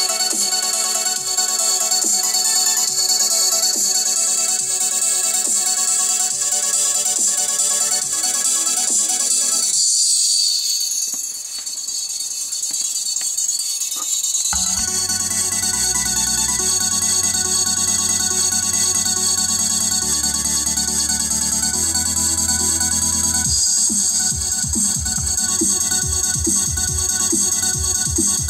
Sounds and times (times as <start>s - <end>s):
Music: 0.0s - 28.4s.